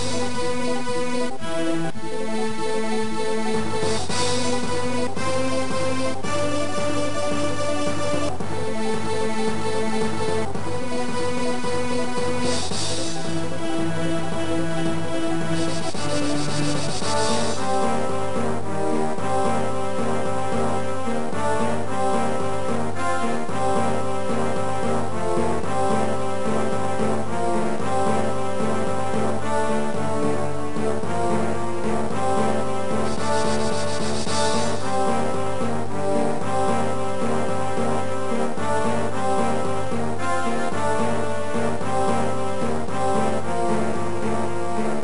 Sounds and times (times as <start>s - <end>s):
Soundtrack music: 0.0s - 45.0s.